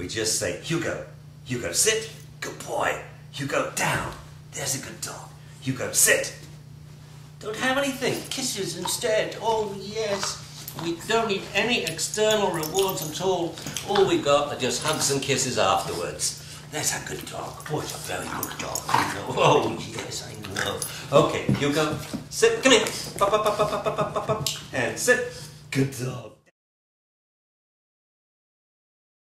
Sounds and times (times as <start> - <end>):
Speech: 0.0 - 6.5, 7.4 - 26.5.